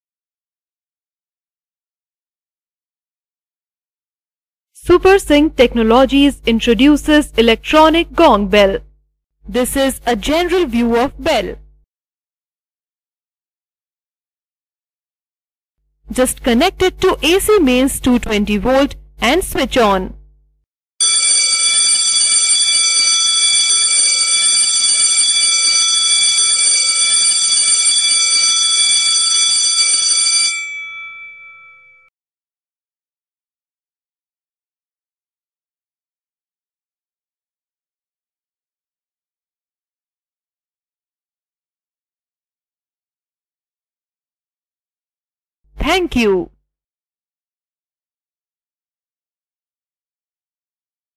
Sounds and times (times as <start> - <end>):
Speech: 4.8 - 8.8, 9.5 - 11.6, 16.1 - 20.2, 45.8 - 46.6.